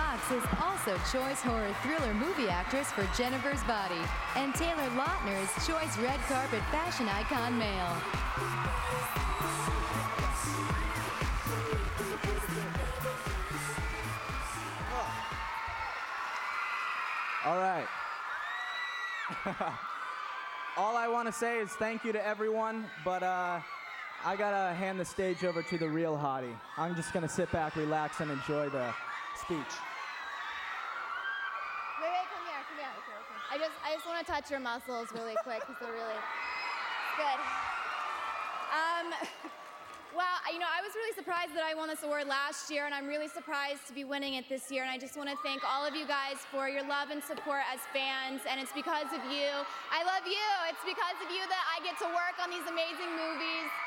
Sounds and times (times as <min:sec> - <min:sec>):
Music: 0:00.0 - 0:16.0
Male speech, man speaking: 0:17.4 - 0:17.9, 0:20.8 - 0:23.6, 0:24.2 - 0:29.8.